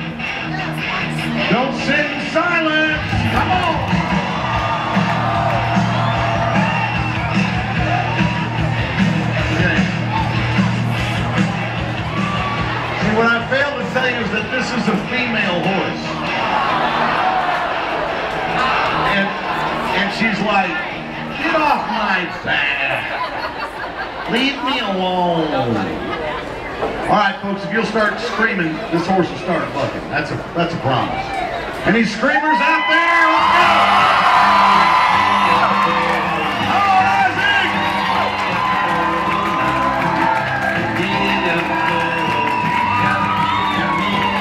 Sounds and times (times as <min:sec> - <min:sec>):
Music: 0:00.0 - 0:23.1, 0:32.7 - 0:44.4.